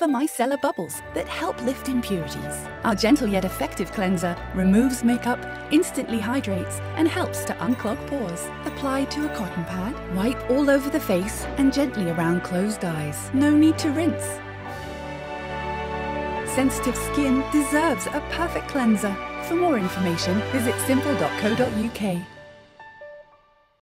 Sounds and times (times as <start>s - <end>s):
Speech: 0.0s - 14.4s, 16.5s - 22.3s
Music: 0.0s - 23.8s.